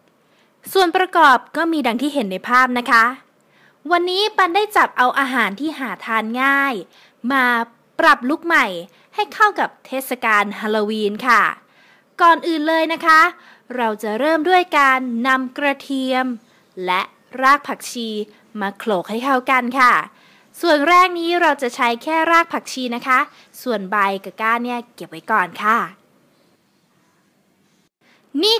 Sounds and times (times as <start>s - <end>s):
Speech: 0.7s - 3.3s, 3.9s - 11.6s, 12.2s - 26.0s, 28.3s - 28.5s.